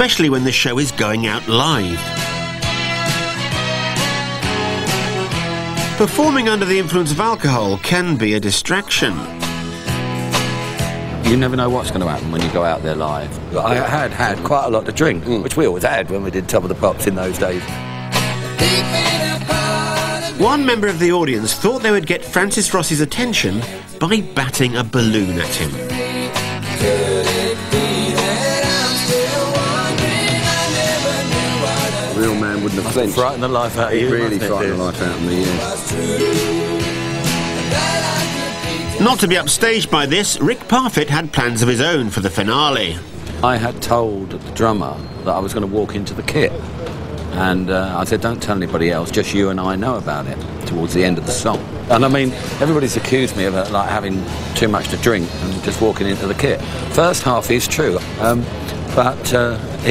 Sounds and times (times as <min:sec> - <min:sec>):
Speech: 0:00.0 - 0:02.1, 0:06.0 - 0:09.3, 0:11.2 - 0:17.7, 0:20.4 - 0:25.8, 0:32.2 - 0:35.8, 0:39.0 - 0:46.6, 0:47.3 - 0:59.9
Drum kit: 0:01.9 - 0:06.8, 0:09.3 - 0:12.8, 0:25.5 - 0:33.1, 0:35.2 - 0:39.4.